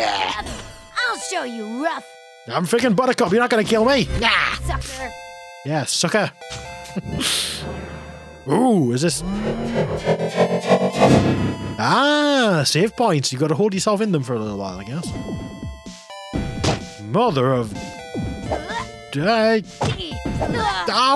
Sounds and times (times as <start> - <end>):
Music: 0.0 - 21.1
Speech: 11.8 - 15.1.